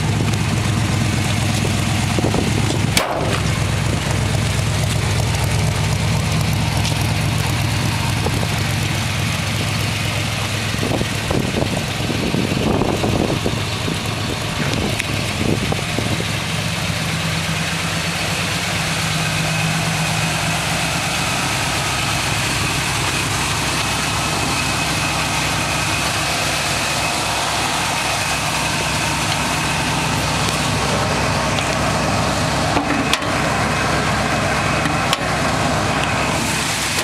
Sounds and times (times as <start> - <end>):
Vehicle: 0.0 - 37.0.